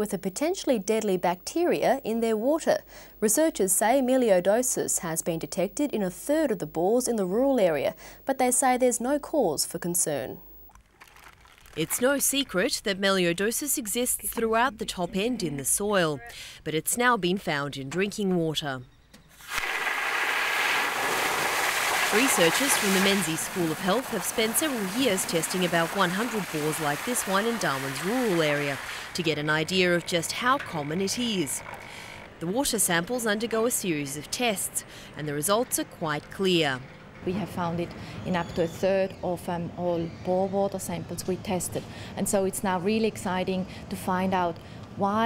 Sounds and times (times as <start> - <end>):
Speech: 0.0 - 10.4, 11.8 - 18.8, 22.1 - 31.6, 32.4 - 45.2.